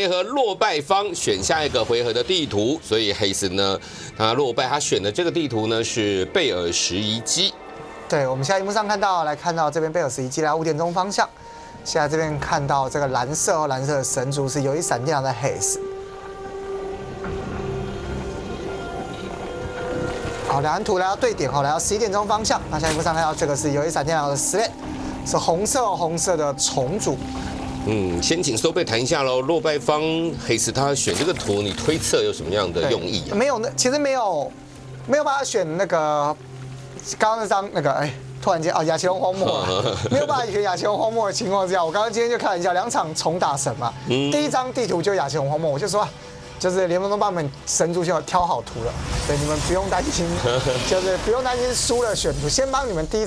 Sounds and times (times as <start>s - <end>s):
Speech: 0.0s - 11.3s, 11.9s - 15.8s, 20.5s - 24.7s, 25.3s - 27.2s, 27.9s - 34.5s, 35.1s - 36.4s, 37.1s - 53.2s
Music: 0.0s - 53.2s.